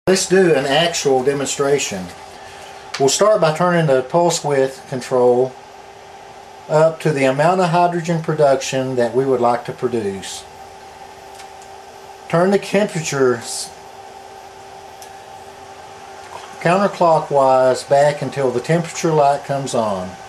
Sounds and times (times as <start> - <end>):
Speech: 0.1 - 2.2, 3.0 - 5.6, 6.7 - 10.5, 12.3 - 13.8, 16.6 - 20.2.